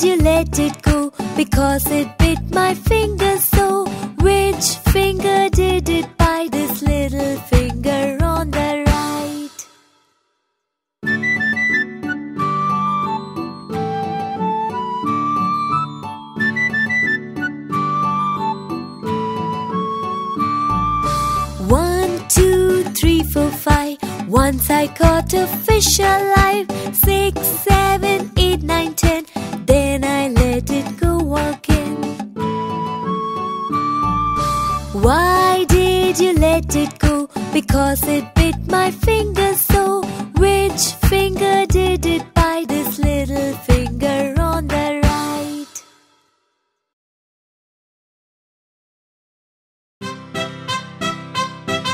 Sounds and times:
Music for children: 0.0s - 9.6s, 11.0s - 45.9s, 50.0s - 51.9s.

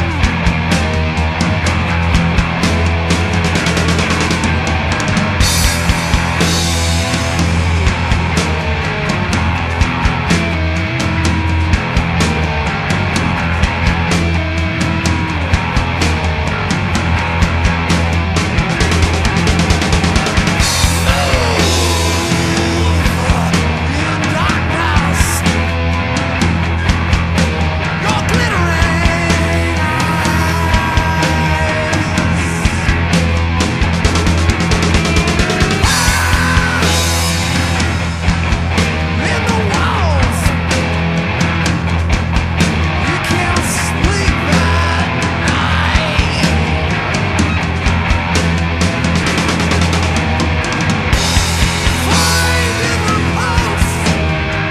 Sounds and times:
Punk rock: 0.0s - 54.7s.

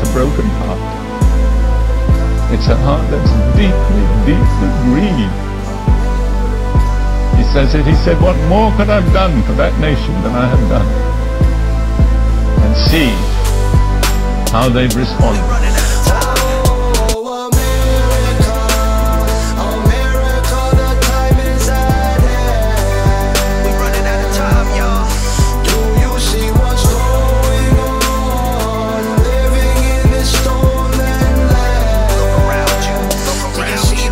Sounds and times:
Music: 0.0s - 34.1s.

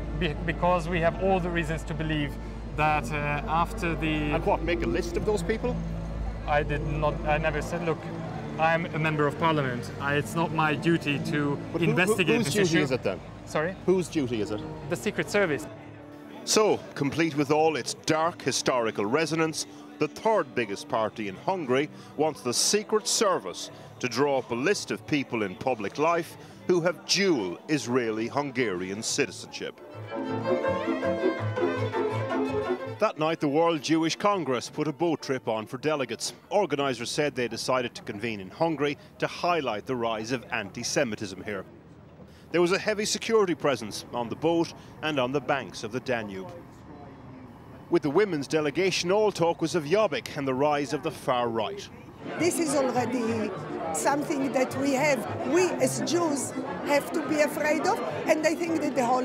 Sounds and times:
Bowed string instrument: 0.0s - 36.1s, 51.7s - 59.2s
Speech: 0.2s - 5.8s, 8.6s - 15.8s, 16.4s - 29.8s, 33.0s - 41.7s.

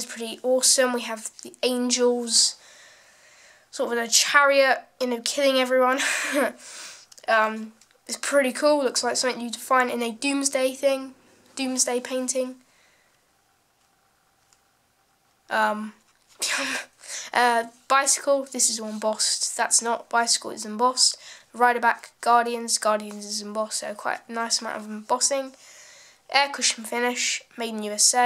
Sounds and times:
Speech: 0.0s - 2.6s, 3.7s - 6.6s, 7.2s - 12.6s, 15.5s - 25.6s, 26.3s - 28.2s.

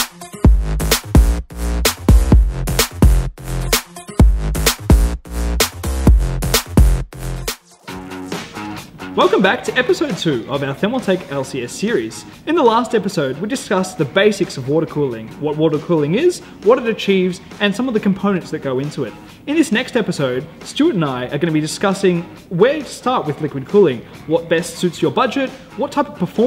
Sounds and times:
Music: 0.0s - 26.4s
Speech: 9.2s - 26.4s.

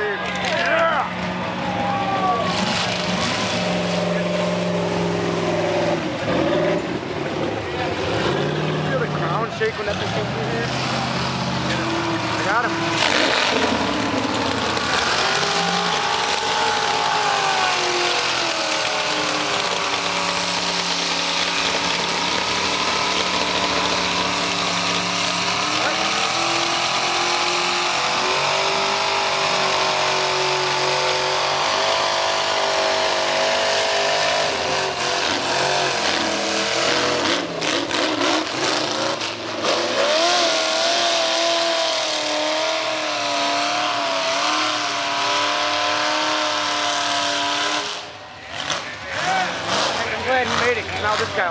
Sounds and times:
Truck: 0.0s - 51.5s.

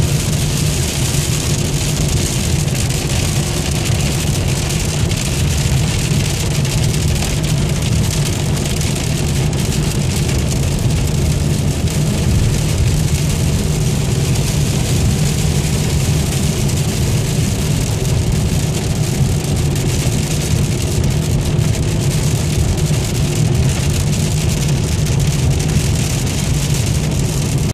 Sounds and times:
Rain on surface: 0.0s - 27.7s.

